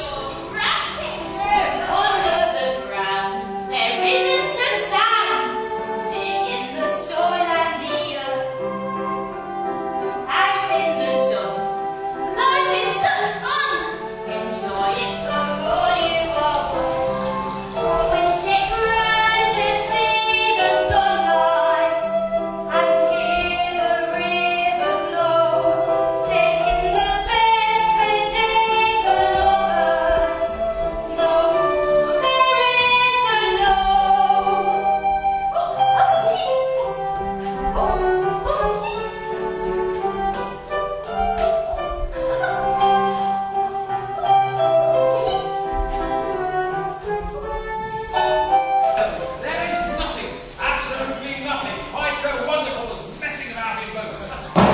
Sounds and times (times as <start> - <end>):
Music: 0.0 - 54.7.